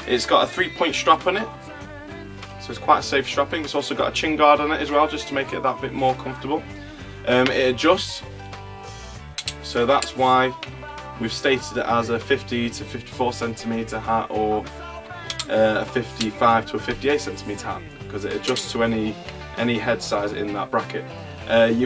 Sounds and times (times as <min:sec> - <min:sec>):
Speech: 0:00.0 - 0:01.5, 0:02.6 - 0:06.6, 0:07.3 - 0:08.2, 0:09.6 - 0:10.6, 0:11.2 - 0:14.7, 0:15.4 - 0:21.8
Music: 0:00.0 - 0:21.8.